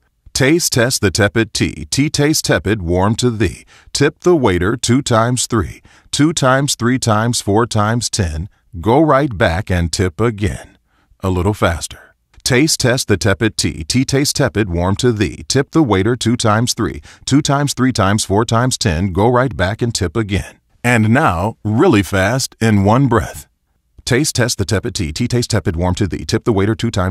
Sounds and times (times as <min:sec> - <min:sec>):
Speech synthesizer: 0:00.4 - 0:23.5, 0:24.1 - 0:27.1.